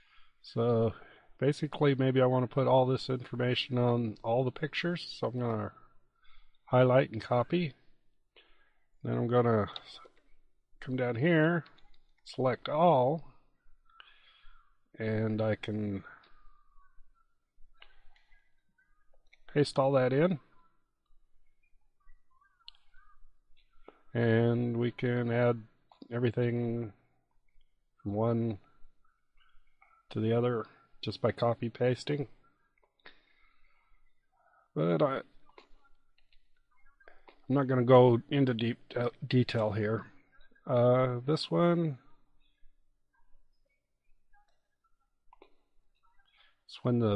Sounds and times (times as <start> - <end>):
Speech: 0.4 - 5.9, 6.7 - 7.9, 9.0 - 10.2, 10.8 - 13.4, 14.9 - 17.2, 19.0 - 20.8, 24.1 - 27.0, 28.0 - 28.7, 29.9 - 32.7, 34.7 - 36.0, 37.0 - 42.2, 46.2 - 47.1.